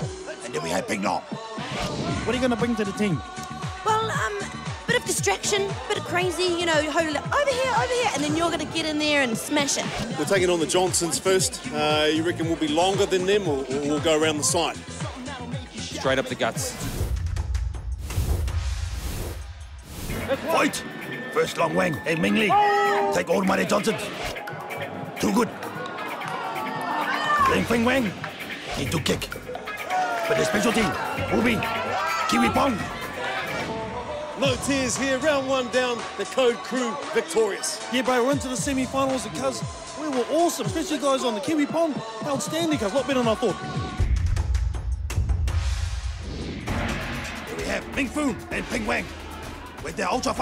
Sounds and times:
Music: 0:00.0 - 0:50.4.

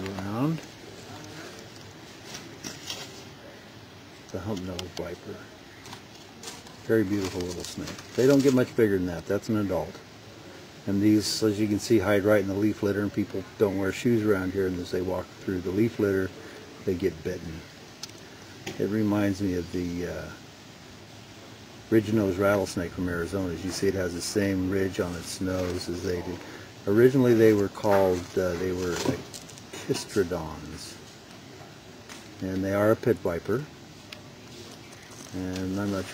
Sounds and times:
Speech: 0:00.0 - 0:01.7, 0:04.3 - 0:05.7, 0:06.7 - 0:10.1, 0:10.8 - 0:17.8, 0:18.7 - 0:20.4, 0:21.9 - 0:31.0, 0:32.4 - 0:33.8, 0:35.2 - 0:36.1.

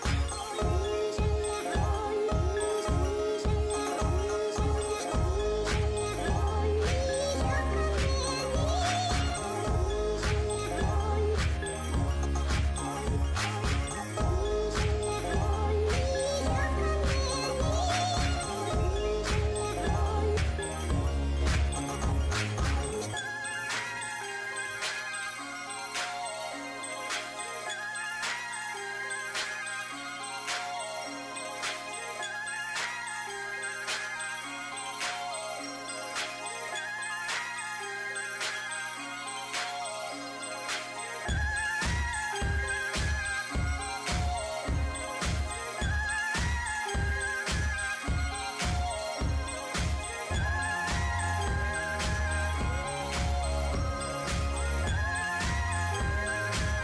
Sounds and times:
Music: 0:00.0 - 0:56.8.

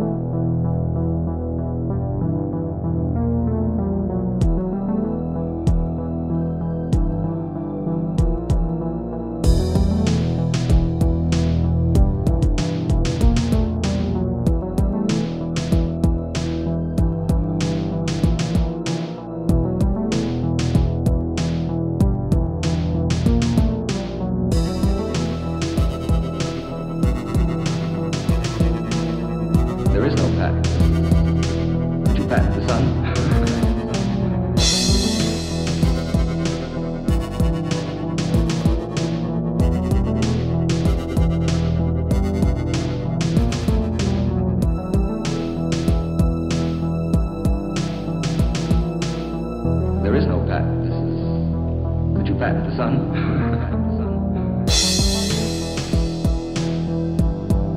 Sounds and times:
Music: 0:00.0 - 0:57.7.

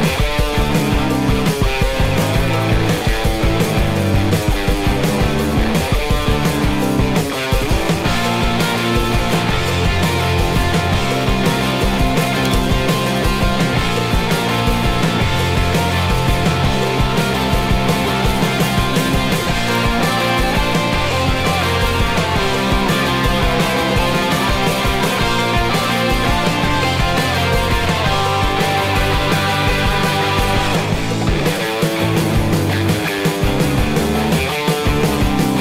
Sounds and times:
Music: 0:00.0 - 0:35.6.

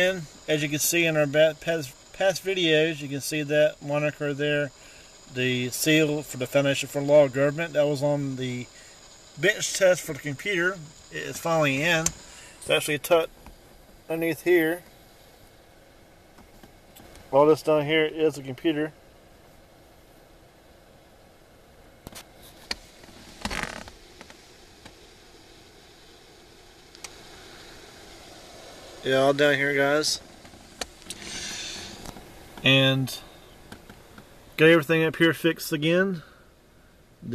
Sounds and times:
Speech: 0:00.0 - 0:04.7, 0:05.3 - 0:08.7, 0:09.4 - 0:13.3, 0:14.1 - 0:14.8, 0:17.3 - 0:19.0, 0:29.0 - 0:30.2, 0:32.6 - 0:33.3, 0:34.6 - 0:36.4.

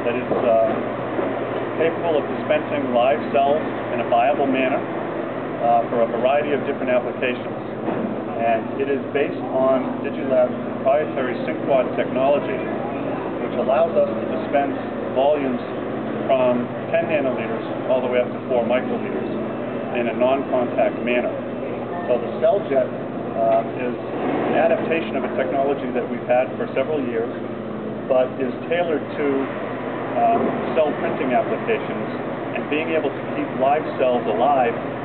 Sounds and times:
Speech: 0:00.0 - 0:00.8, 0:01.8 - 0:04.9, 0:05.6 - 0:07.7, 0:08.4 - 0:27.4, 0:28.1 - 0:29.5, 0:30.2 - 0:34.8.

